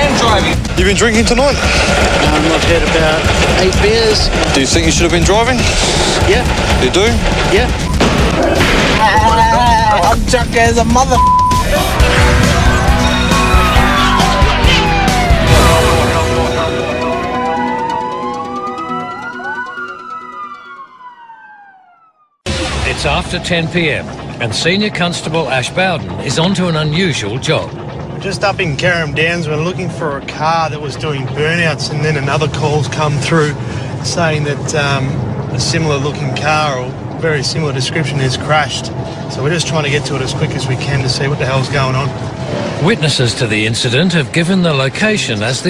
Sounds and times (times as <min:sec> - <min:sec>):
Police car (siren): 0:12.8 - 0:22.4.